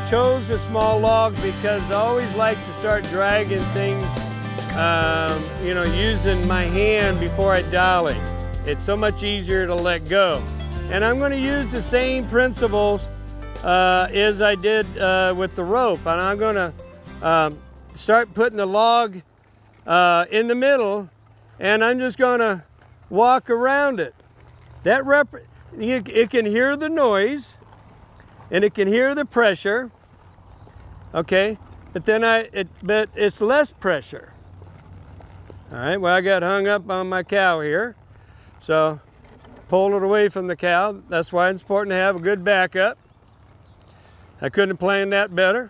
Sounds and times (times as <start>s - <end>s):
Speech: 0.0s - 4.2s, 4.8s - 19.2s, 19.9s - 24.1s, 24.8s - 27.6s, 28.5s - 29.9s, 31.2s - 34.3s, 35.7s - 38.0s, 38.6s - 39.0s, 39.7s - 43.0s, 44.4s - 45.6s
Music: 0.0s - 18.8s.